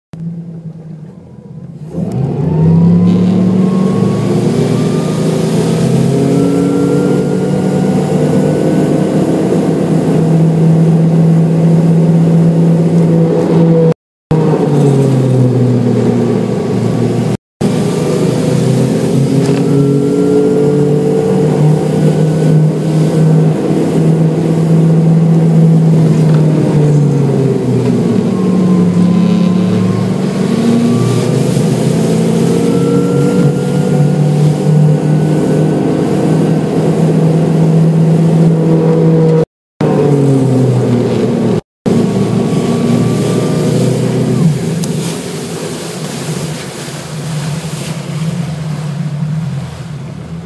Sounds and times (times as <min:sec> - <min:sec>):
Outside, rural or natural: 0:00.1 - 0:50.4
Motorboat, speedboat: 0:00.2 - 0:50.4.